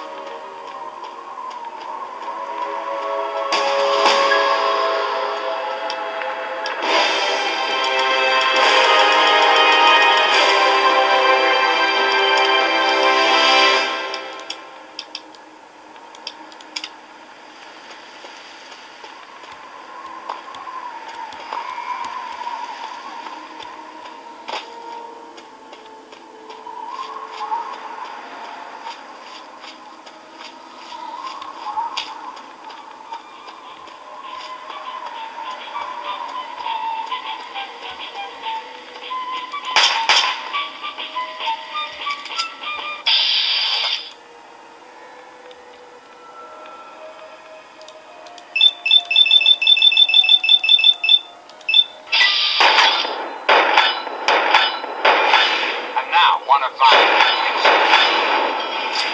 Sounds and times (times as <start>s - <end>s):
Speech: 56.0s - 57.0s.